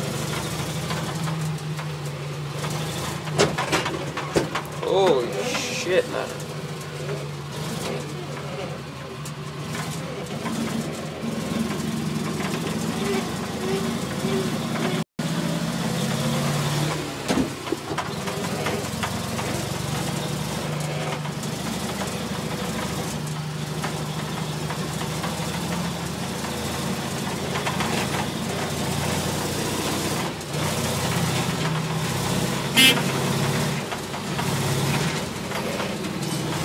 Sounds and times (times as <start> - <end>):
Truck: 0.0 - 36.6.